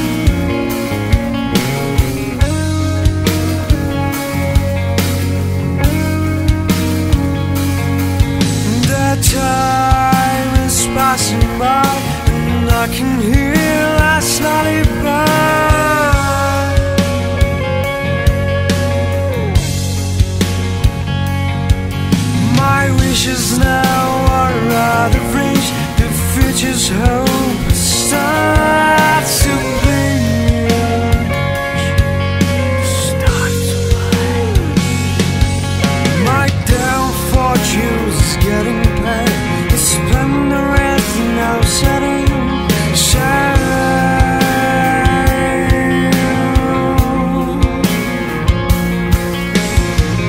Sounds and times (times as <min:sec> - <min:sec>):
New-age music: 0:00.0 - 0:50.2
Soul music: 0:00.0 - 0:50.2.